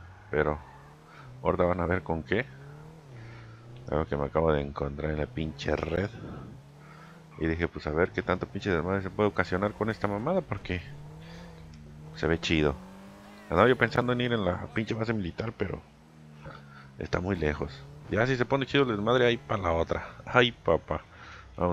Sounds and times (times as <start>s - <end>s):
Speech: 0.4s - 0.6s, 1.4s - 2.5s, 3.9s - 6.4s, 7.4s - 11.0s, 12.2s - 15.8s, 17.0s - 21.7s.